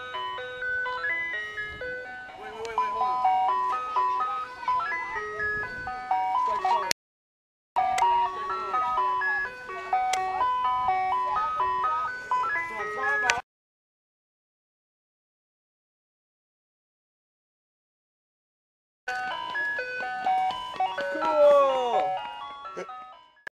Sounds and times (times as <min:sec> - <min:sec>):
Music: 0:00.0 - 0:06.9, 0:07.8 - 0:13.4, 0:19.1 - 0:23.4.